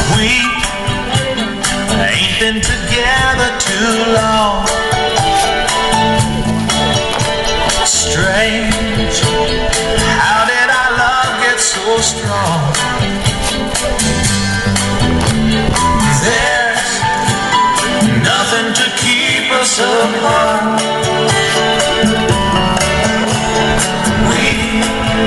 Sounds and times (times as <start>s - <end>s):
Music: 0.0s - 25.2s.